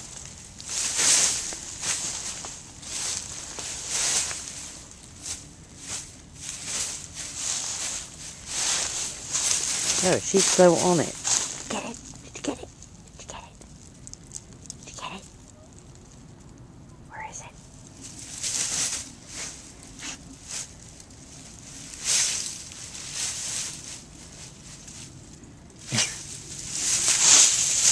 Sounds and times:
Speech: 9.9s - 13.6s, 14.9s - 15.3s, 25.9s - 26.2s.

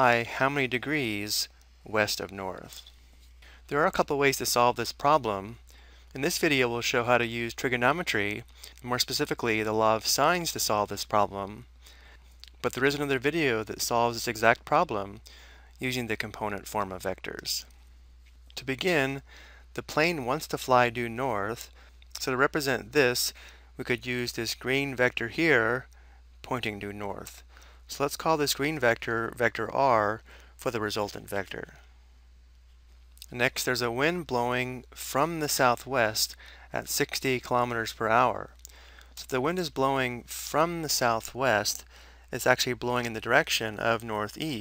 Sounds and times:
Speech: 0.0s - 2.8s, 3.7s - 11.7s, 12.5s - 15.2s, 15.8s - 17.7s, 18.6s - 19.2s, 19.8s - 31.8s, 33.2s - 38.6s, 39.2s - 44.6s.

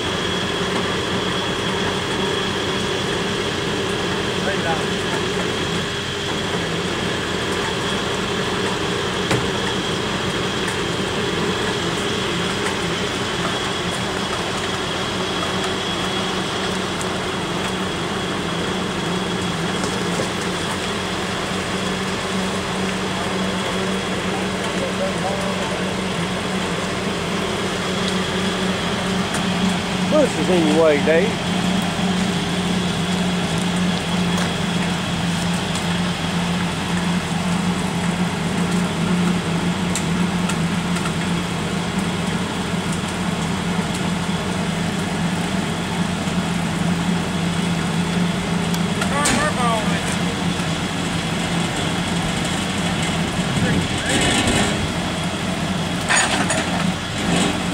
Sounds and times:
Speech: 4.4s - 5.0s, 24.0s - 26.0s, 30.1s - 31.4s, 49.0s - 50.4s, 53.5s - 54.3s.

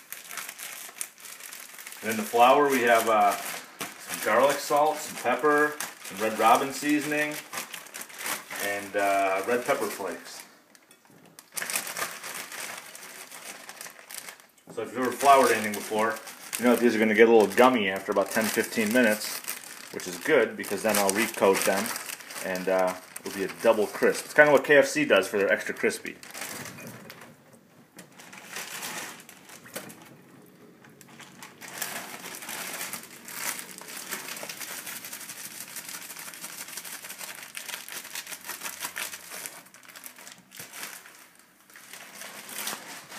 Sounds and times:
Speech: 2.0s - 7.4s, 8.6s - 10.5s, 14.7s - 26.2s.

